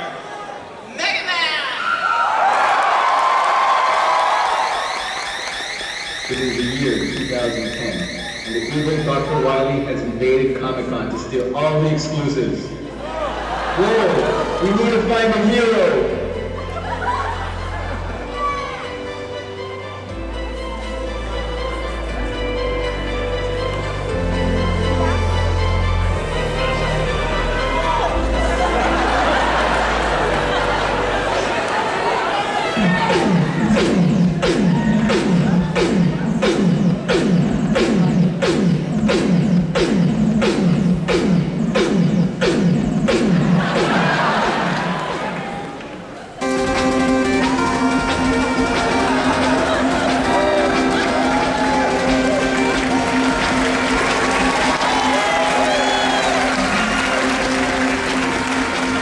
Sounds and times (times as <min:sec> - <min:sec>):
Music: 0:03.1 - 0:59.0.